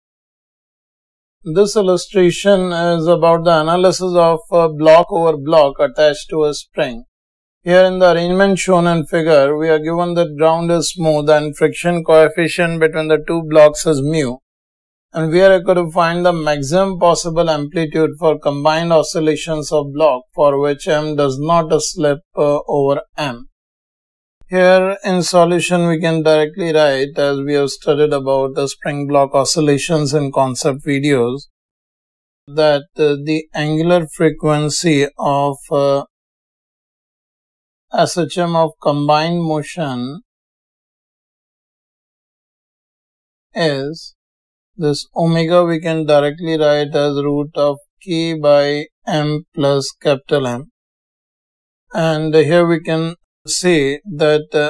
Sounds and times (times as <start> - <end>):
Speech: 1.5 - 7.1, 7.7 - 14.4, 15.2 - 23.5, 24.5 - 31.5, 32.5 - 36.1, 38.0 - 40.2, 43.6 - 44.1, 44.8 - 50.7, 51.9 - 54.6.